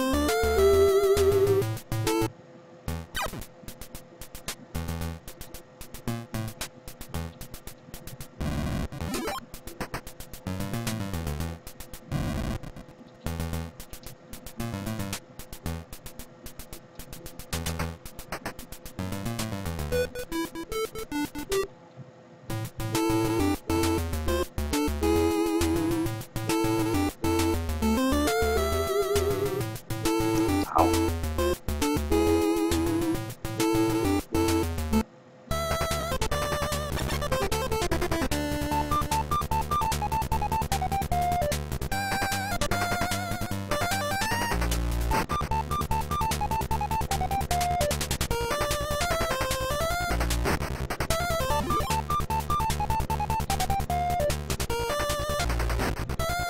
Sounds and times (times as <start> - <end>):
Music: 0.0 - 21.8, 22.5 - 56.5.